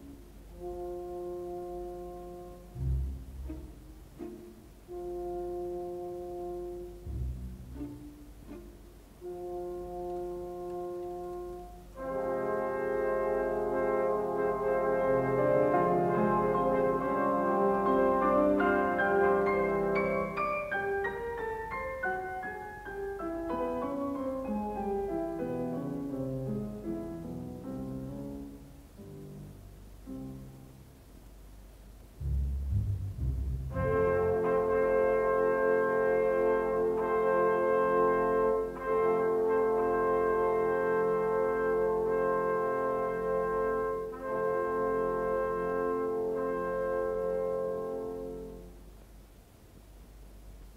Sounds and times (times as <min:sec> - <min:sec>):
Brass instrument: 0:00.0 - 0:31.0, 0:32.2 - 0:49.0.